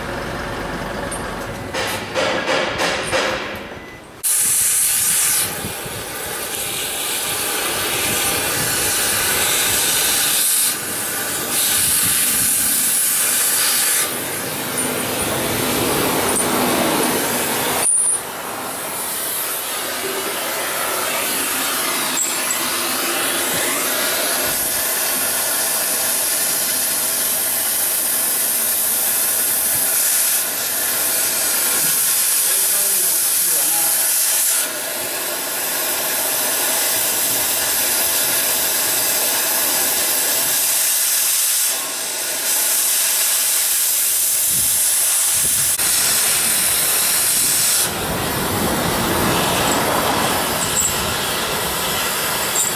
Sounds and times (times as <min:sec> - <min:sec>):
Vehicle: 0:00.0 - 0:52.7.